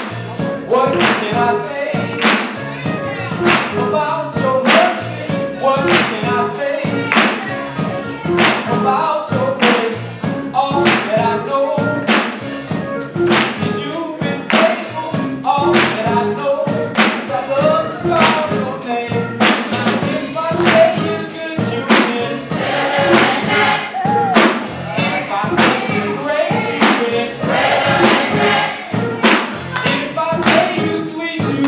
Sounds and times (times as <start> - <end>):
Music: 0.0 - 31.6
Male singing: 0.6 - 12.2, 13.6 - 22.5, 24.0 - 27.5, 29.1 - 31.6.